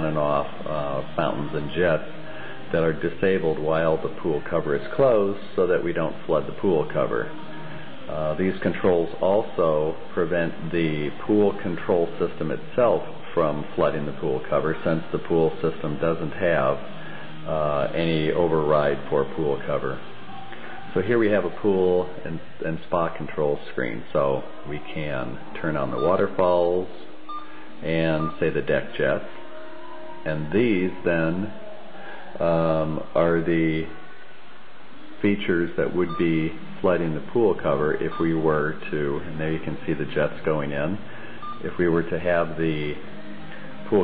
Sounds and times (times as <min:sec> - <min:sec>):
Speech: 0:00.0 - 0:07.4, 0:08.1 - 0:16.9, 0:17.5 - 0:20.0, 0:20.9 - 0:27.2, 0:27.8 - 0:29.3, 0:30.3 - 0:31.6, 0:32.4 - 0:34.0, 0:35.2 - 0:41.0, 0:41.6 - 0:43.0
Beep, bleep: 0:27.3 - 0:27.6, 0:38.1 - 0:38.4, 0:41.4 - 0:41.7.